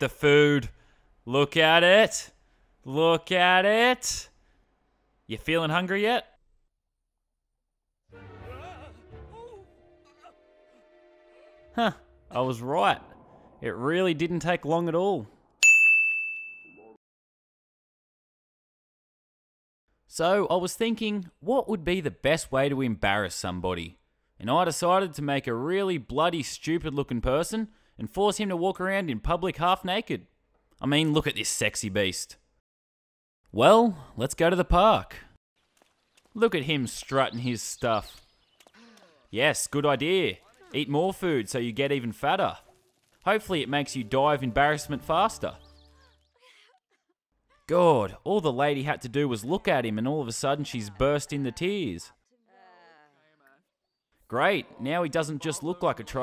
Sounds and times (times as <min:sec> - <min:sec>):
Speech: 0:00.0 - 0:00.7, 0:01.3 - 0:02.3, 0:02.9 - 0:04.3, 0:05.3 - 0:06.4, 0:11.8 - 0:13.0, 0:13.6 - 0:15.3, 0:20.1 - 0:30.2, 0:30.8 - 0:32.4, 0:33.6 - 0:35.3, 0:36.4 - 0:38.1, 0:38.8 - 0:42.6, 0:43.3 - 0:46.8, 0:47.5 - 0:53.6, 0:54.3 - 0:56.2
Music: 0:08.1 - 0:12.4, 0:43.5 - 0:46.0
Silence: 0:09.8 - 0:15.6.